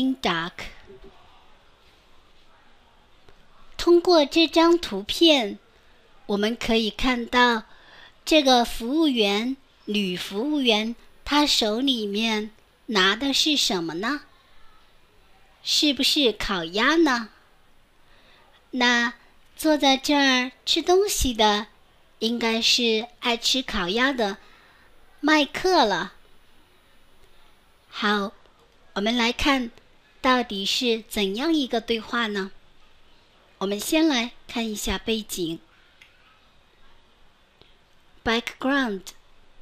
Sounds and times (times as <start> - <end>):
Speech: 0.0 - 17.4, 18.6 - 24.4, 25.2 - 26.2, 27.9 - 32.6, 33.4 - 35.7, 38.2 - 39.2.